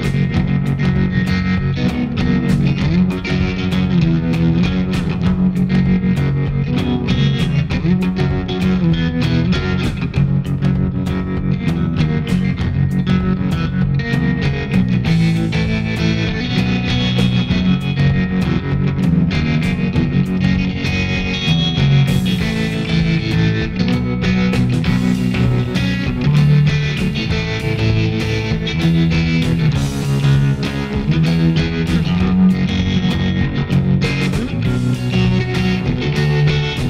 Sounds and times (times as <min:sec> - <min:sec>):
Bass guitar: 0:00.0 - 0:36.8
Distortion: 0:00.0 - 0:36.8
Effects unit: 0:00.0 - 0:36.8.